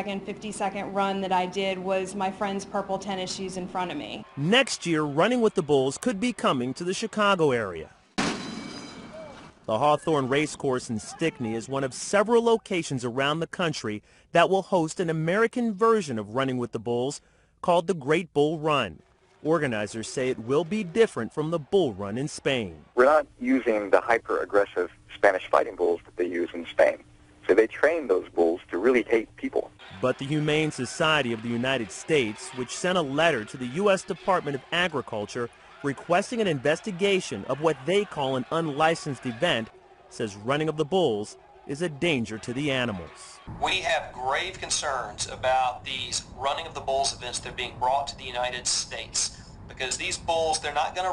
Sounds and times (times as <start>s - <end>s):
Speech: 9.7s - 51.1s.